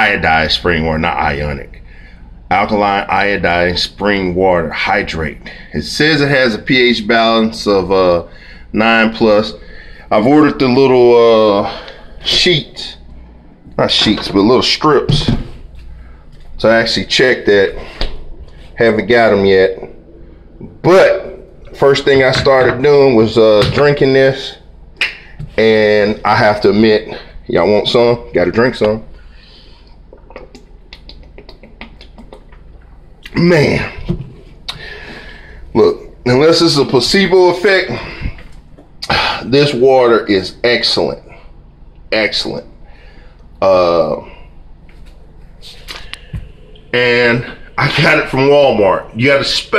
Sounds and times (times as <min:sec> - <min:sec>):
Speech: 0:00.0 - 0:01.8, 0:02.5 - 0:13.1, 0:13.8 - 0:15.5, 0:16.6 - 0:18.0, 0:18.8 - 0:20.0, 0:20.6 - 0:24.6, 0:25.4 - 0:29.1, 0:33.3 - 0:34.2, 0:35.7 - 0:38.4, 0:39.0 - 0:41.4, 0:42.1 - 0:42.8, 0:43.6 - 0:44.4, 0:46.9 - 0:49.7.